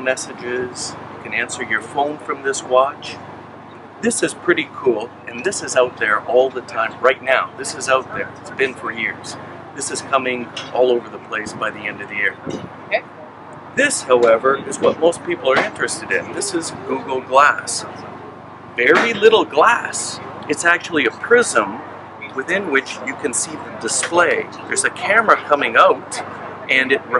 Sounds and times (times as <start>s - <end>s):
Speech: 0.0s - 3.2s, 4.0s - 13.0s, 13.8s - 18.0s, 18.8s - 27.1s.